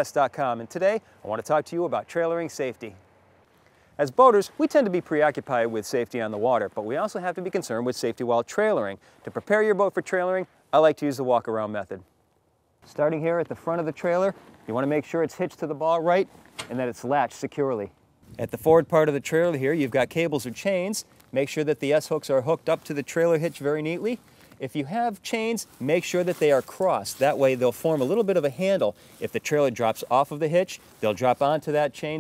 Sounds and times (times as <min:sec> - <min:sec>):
Speech: 0:00.0 - 0:03.0, 0:04.0 - 0:12.1, 0:12.9 - 0:32.2.